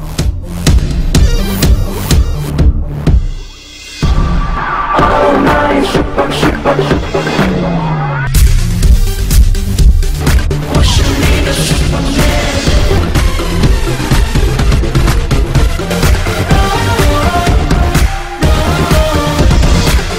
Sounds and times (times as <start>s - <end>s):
Music: 0.0s - 20.1s.